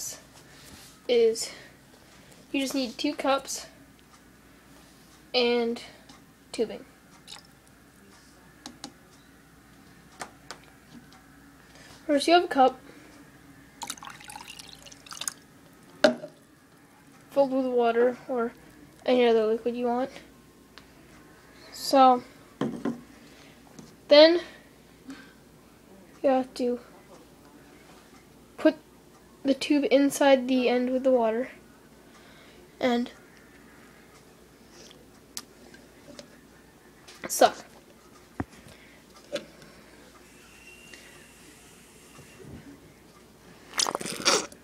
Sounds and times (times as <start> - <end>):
Speech: 2.6 - 3.8, 12.1 - 12.8, 17.3 - 20.3, 25.9 - 28.8, 32.8 - 33.2, 36.1 - 37.7.